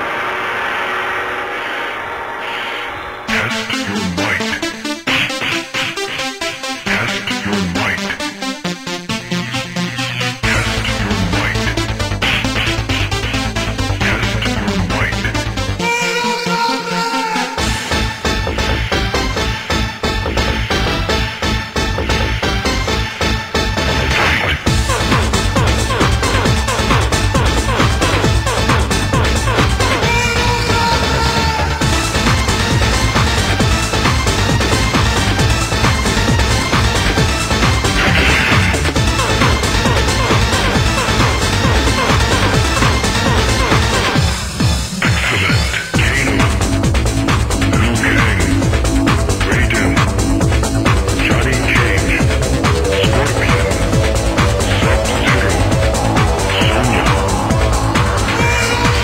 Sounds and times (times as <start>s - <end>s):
Music: 0.0s - 59.0s.